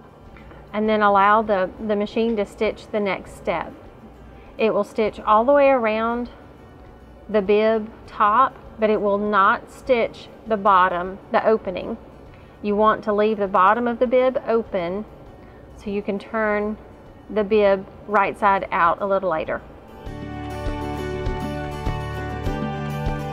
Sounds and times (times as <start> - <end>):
Music: 0.0 - 23.3
Speech: 0.8 - 3.7, 4.6 - 6.3, 7.3 - 12.0, 12.6 - 15.0, 15.8 - 19.6.